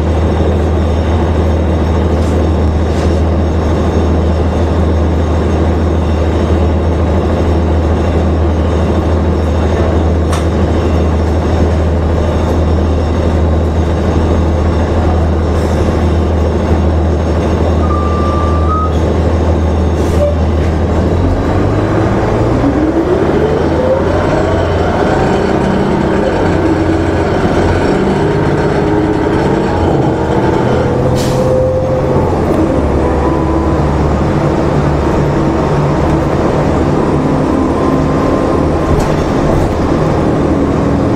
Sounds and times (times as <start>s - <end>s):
Bus: 0.0s - 41.1s.